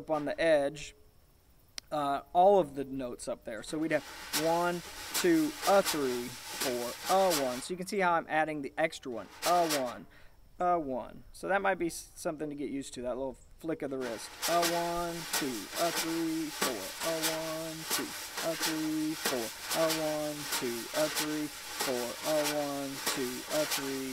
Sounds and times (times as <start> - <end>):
Speech: 0.0 - 1.0, 1.9 - 24.1.